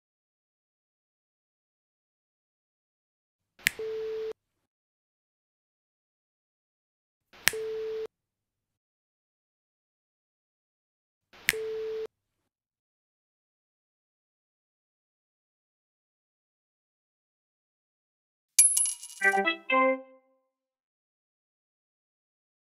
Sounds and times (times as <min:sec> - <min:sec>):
Music: 0:19.2 - 0:20.5.